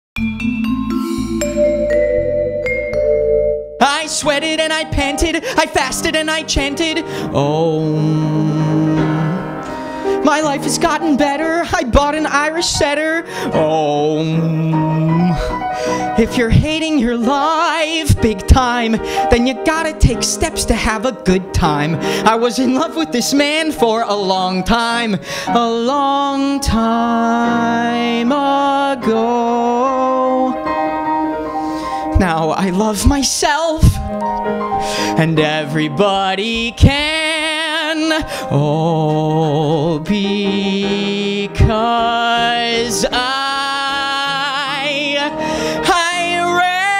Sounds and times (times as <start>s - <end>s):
Vibraphone: 0.2s - 3.9s
Inside, large room or hall: 7.9s - 11.4s.